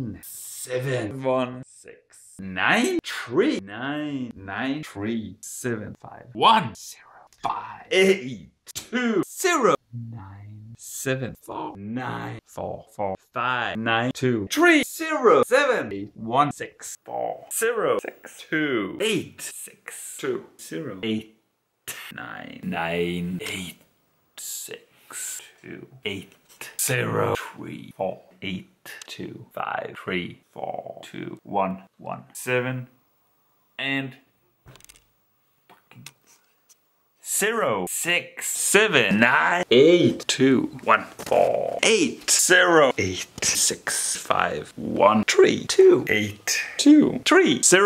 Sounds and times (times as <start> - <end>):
Speech: 0.0 - 23.8, 24.4 - 32.9, 33.8 - 34.2, 37.2 - 47.8
Inside, small room: 0.0 - 47.8.